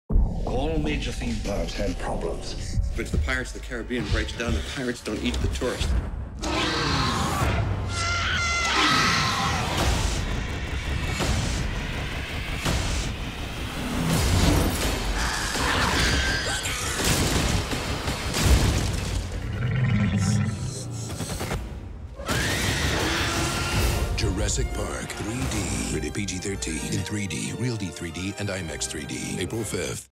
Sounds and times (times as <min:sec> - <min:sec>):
Music: 0:00.1 - 0:17.0, 0:21.7 - 0:30.1
Speech: 0:00.5 - 0:05.9, 0:24.2 - 0:30.1.